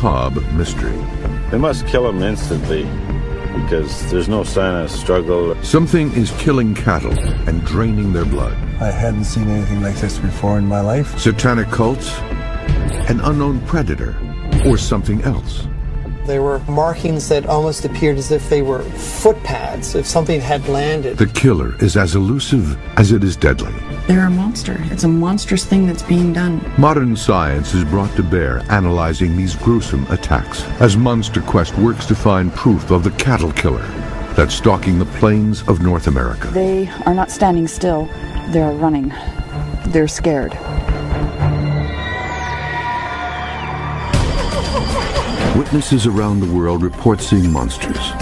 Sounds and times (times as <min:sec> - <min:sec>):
Speech: 0:00.0 - 0:02.9, 0:03.6 - 0:12.2, 0:13.1 - 0:15.7, 0:16.3 - 0:39.1, 0:45.6 - 0:48.2
Music: 0:00.0 - 0:48.2.